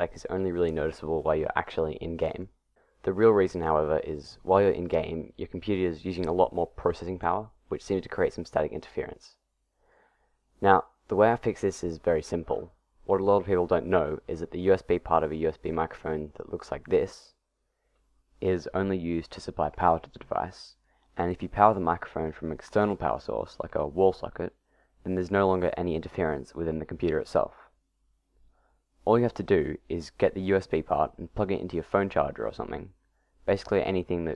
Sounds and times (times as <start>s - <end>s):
Speech: 0.0s - 9.4s, 10.6s - 17.4s, 18.4s - 27.8s, 29.0s - 34.3s.